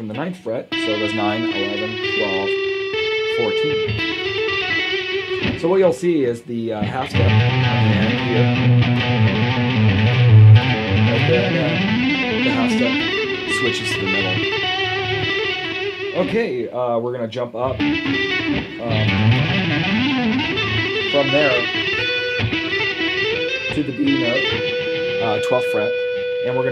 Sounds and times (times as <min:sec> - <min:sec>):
Speech: 0:00.0 - 0:02.6, 0:03.3 - 0:03.8, 0:05.6 - 0:08.6, 0:11.0 - 0:11.8, 0:12.4 - 0:14.4, 0:16.2 - 0:17.8, 0:18.8 - 0:19.2, 0:21.1 - 0:21.7, 0:23.7 - 0:24.6, 0:25.2 - 0:26.7
Tapping (guitar technique): 0:00.7 - 0:06.0, 0:06.8 - 0:16.4, 0:17.6 - 0:26.7.